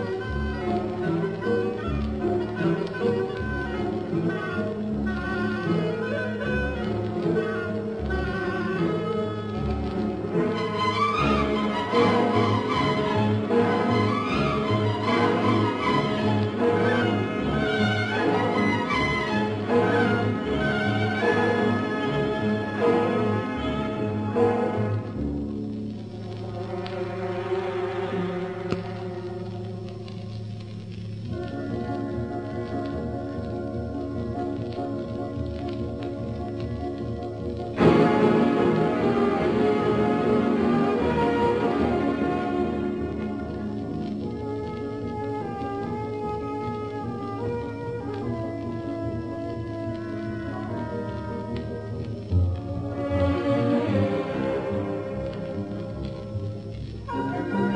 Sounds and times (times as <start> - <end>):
Orchestra: 0.0 - 57.7.